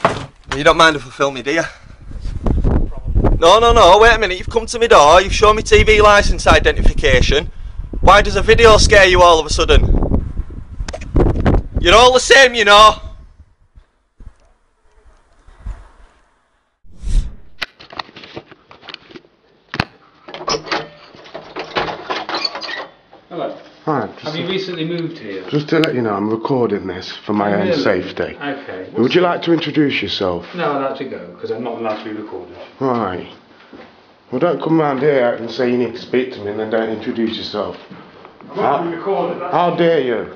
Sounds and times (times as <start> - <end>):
Speech: 0.5 - 1.8, 2.9 - 7.5, 8.1 - 9.9, 11.8 - 13.1, 23.3 - 33.4, 34.3 - 37.9, 38.5 - 40.3.